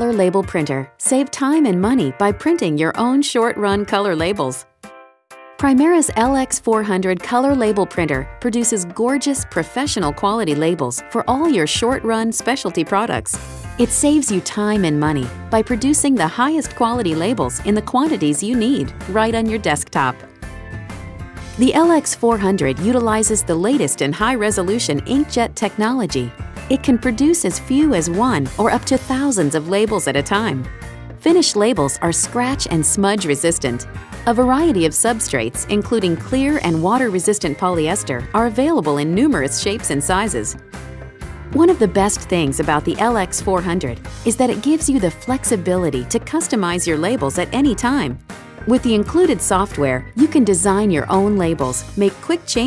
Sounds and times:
Speech: 0:00.0 - 0:04.6, 0:05.6 - 0:20.2, 0:21.6 - 0:40.6, 0:41.6 - 0:52.6
Music: 0:00.0 - 0:52.6.

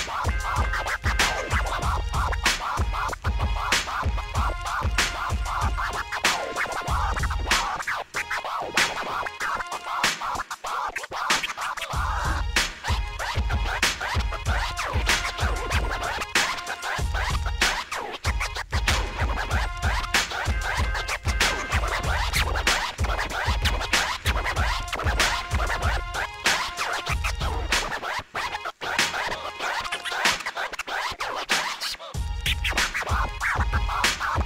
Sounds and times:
Scratching (performance technique): 0:00.0 - 0:34.4.

